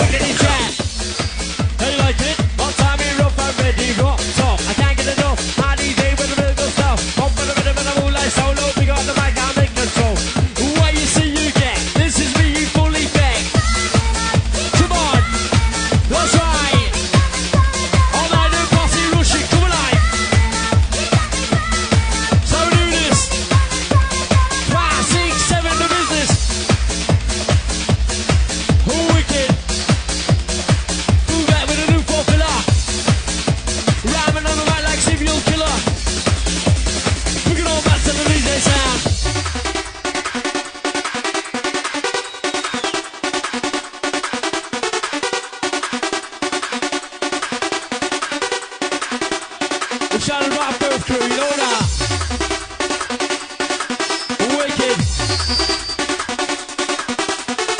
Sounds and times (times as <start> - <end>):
Techno: 0.0 - 57.7
Trance music: 0.0 - 57.7.